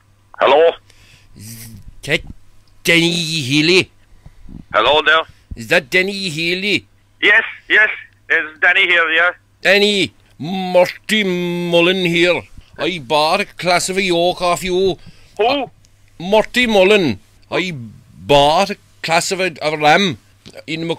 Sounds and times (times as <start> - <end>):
Speech: 0.4 - 0.8, 1.4 - 3.9, 4.7 - 20.9.